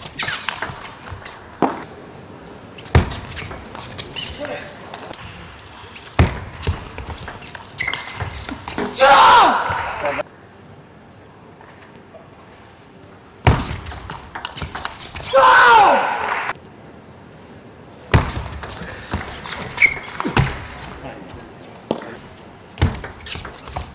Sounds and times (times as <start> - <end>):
Male speech, man speaking: 9.9 - 10.2, 21.0 - 22.2.